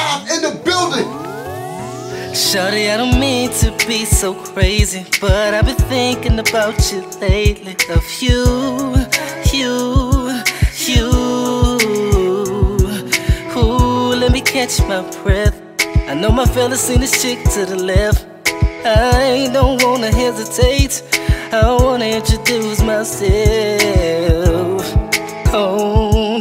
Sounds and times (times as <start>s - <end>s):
Blues: 0.0s - 26.4s.